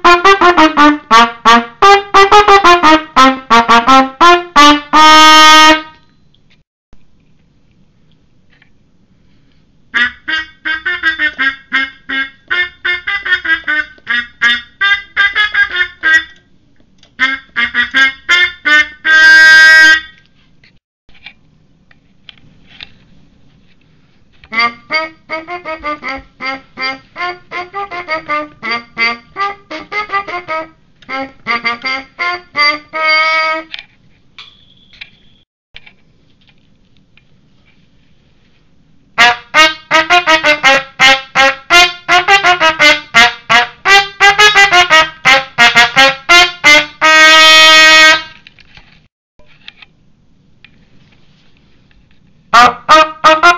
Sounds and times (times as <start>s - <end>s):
Trumpet: 0.0s - 6.1s, 10.0s - 16.4s, 17.2s - 20.2s, 24.4s - 33.8s, 39.2s - 48.5s, 52.5s - 53.5s.